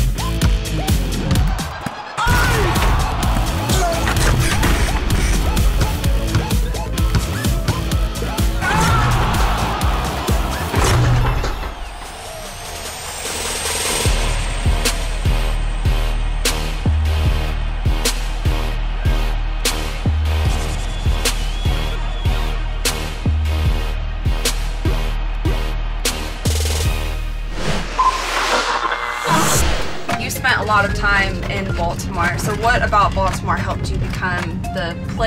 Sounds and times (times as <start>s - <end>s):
Music: 0.0s - 35.2s.